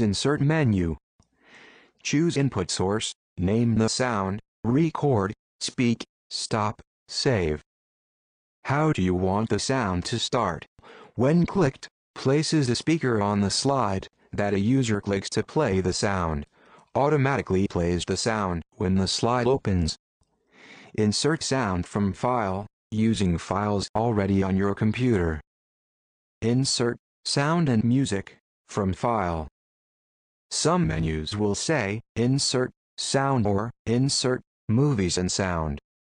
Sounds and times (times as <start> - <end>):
Speech: 0.0 - 1.0, 2.0 - 7.7, 8.6 - 20.0, 20.9 - 25.5, 26.4 - 29.6, 30.5 - 35.9.